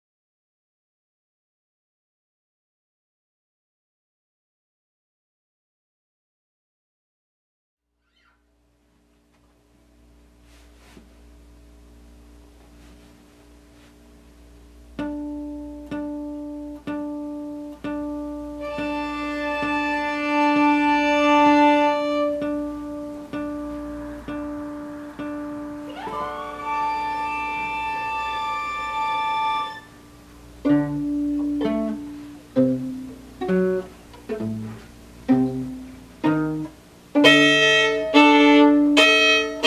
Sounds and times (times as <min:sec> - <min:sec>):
Violin, fiddle: 0:18.6 - 0:22.7, 0:24.2 - 0:30.0, 0:37.2 - 0:39.6.